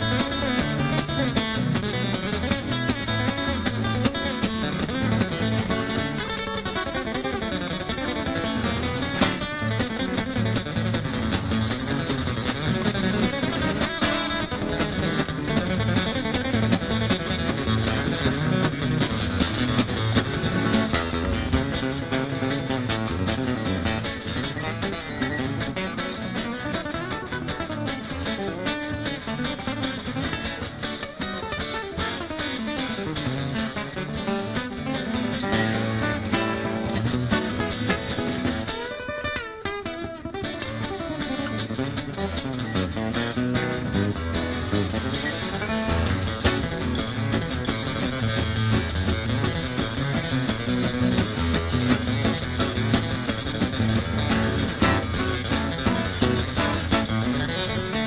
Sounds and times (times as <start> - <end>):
Music: 0.0 - 58.0.